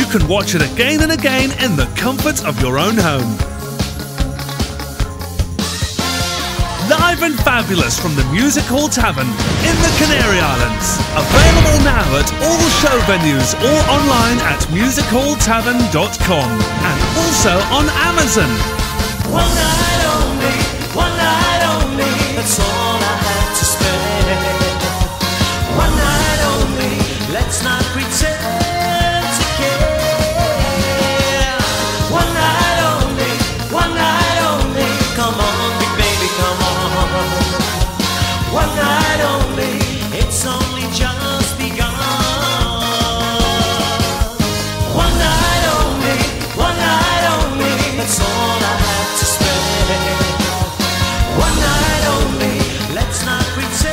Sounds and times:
Speech: 0.0 - 3.4, 6.8 - 18.8
Music: 0.0 - 53.9.

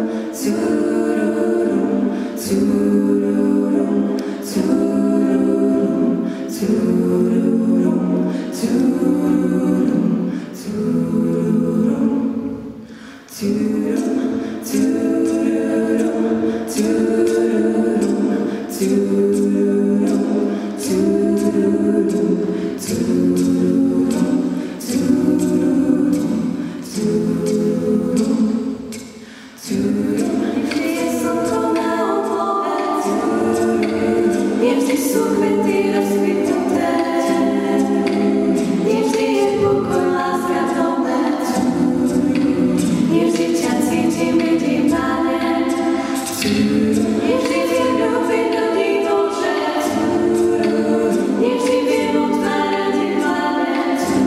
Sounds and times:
A capella: 0.0 - 54.2.

